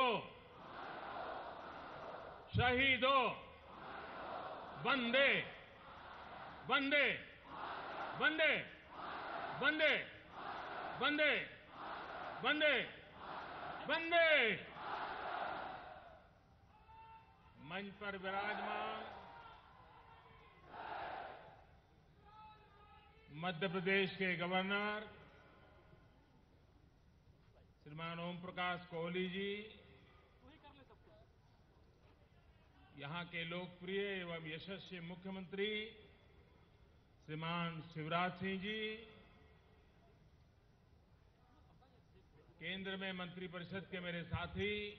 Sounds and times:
Male speech, man speaking: 0:00.0 - 0:00.3, 0:02.5 - 0:03.4, 0:04.8 - 0:05.6, 0:06.7 - 0:07.3, 0:08.2 - 0:08.8, 0:09.6 - 0:10.1, 0:11.0 - 0:11.6, 0:12.4 - 0:13.0, 0:13.9 - 0:14.6, 0:17.6 - 0:19.1, 0:22.2 - 0:25.2, 0:27.5 - 0:29.8, 0:30.4 - 0:31.3, 0:32.2 - 0:36.0, 0:37.3 - 0:39.2, 0:41.4 - 0:44.9
Narration, monologue: 0:00.0 - 0:00.6, 0:02.5 - 0:03.7, 0:04.7 - 0:13.2, 0:13.8 - 0:14.8, 0:17.3 - 0:19.3, 0:22.2 - 0:25.8, 0:27.2 - 0:40.0, 0:41.4 - 0:44.9.

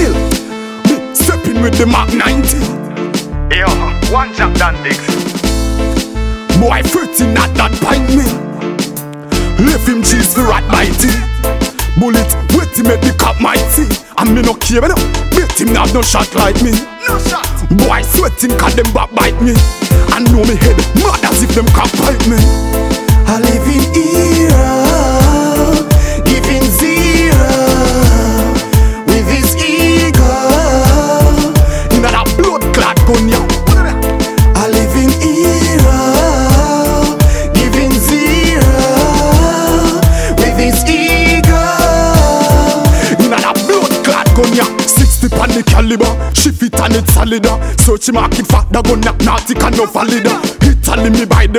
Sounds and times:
Music: 0:00.0 - 0:51.5.

